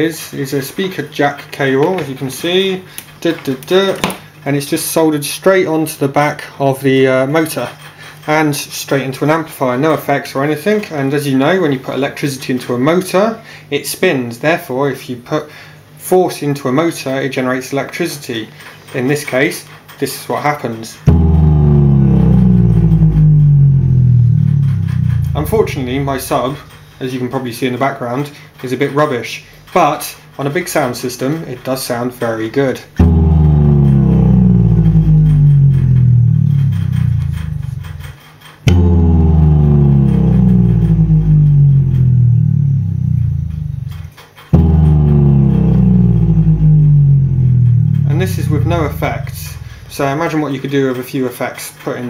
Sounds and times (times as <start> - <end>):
Speech: 0.0 - 21.1, 25.4 - 33.0, 48.0 - 52.0.